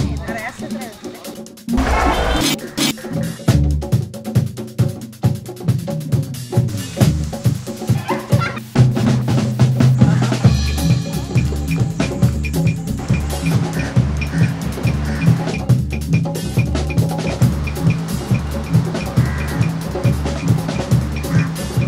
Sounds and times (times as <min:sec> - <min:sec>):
Drum roll: 0:00.0 - 0:21.8.